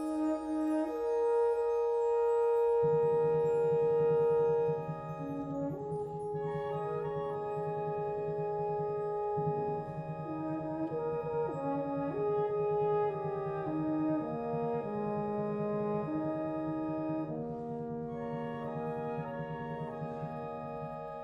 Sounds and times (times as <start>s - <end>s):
French horn: 0.0s - 21.2s
Orchestra: 0.0s - 21.2s.